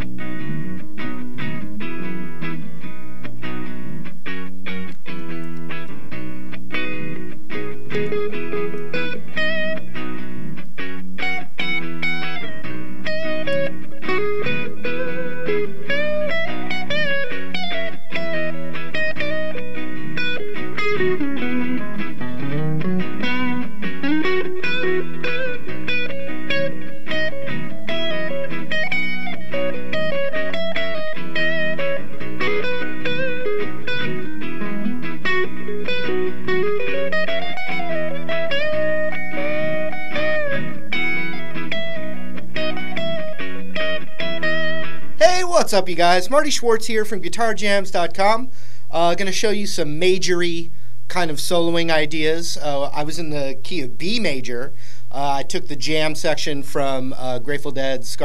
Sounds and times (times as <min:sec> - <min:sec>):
Electric guitar: 0:00.0 - 0:58.2.